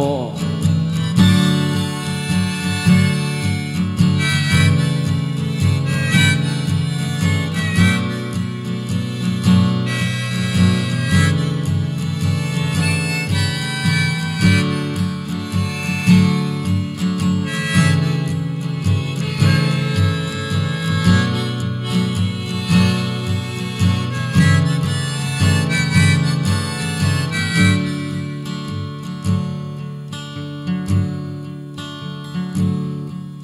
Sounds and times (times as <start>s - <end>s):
Music: 0.0s - 33.4s.